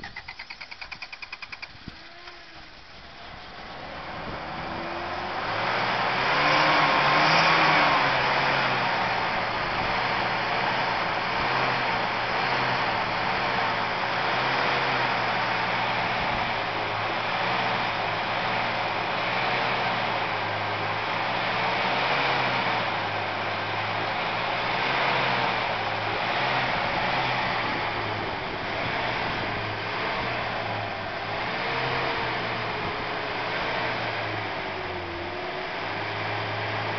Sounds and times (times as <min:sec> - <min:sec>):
Truck: 0:00.0 - 0:36.9.